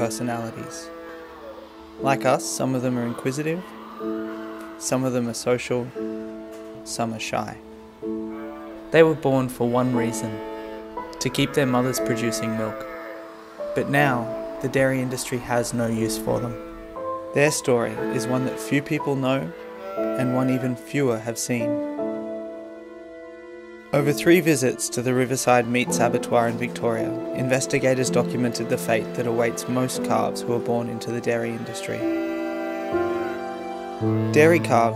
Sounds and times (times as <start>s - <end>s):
Speech: 0.0s - 0.9s, 2.0s - 3.7s, 4.8s - 6.0s, 6.8s - 7.6s, 8.9s - 10.4s, 11.2s - 12.8s, 13.8s - 16.6s, 17.4s - 19.5s, 20.2s - 21.7s, 24.0s - 32.1s, 34.2s - 34.9s
Music: 0.0s - 34.9s.